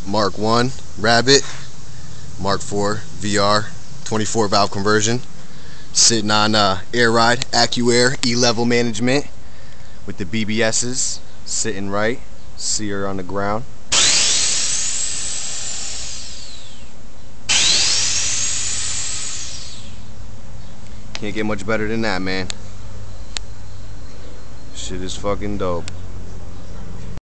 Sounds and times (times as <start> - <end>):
Speech: 0.0 - 1.5, 2.4 - 5.2, 6.0 - 9.3, 10.1 - 13.7, 21.2 - 22.5, 24.7 - 25.9
Vehicle: 13.2 - 27.2.